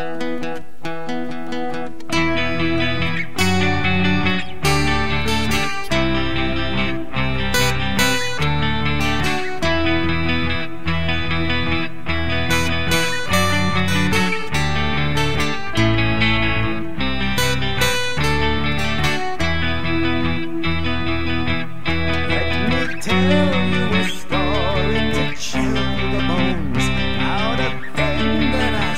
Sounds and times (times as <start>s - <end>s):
Acoustic guitar: 0.0s - 28.9s.